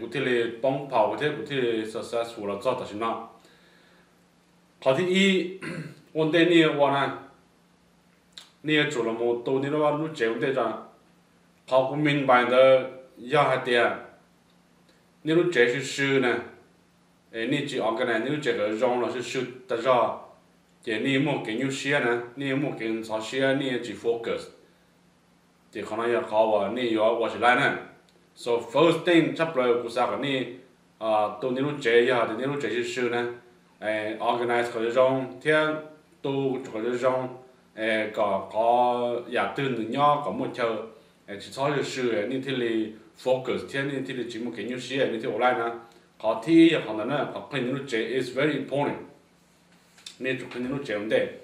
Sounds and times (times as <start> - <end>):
Male speech, man speaking: 0.0 - 3.3, 4.8 - 7.2, 8.4 - 10.9, 11.7 - 14.1, 15.3 - 16.5, 17.4 - 20.3, 20.9 - 24.6, 25.8 - 49.1, 50.1 - 51.4
Narration, monologue: 0.0 - 51.4.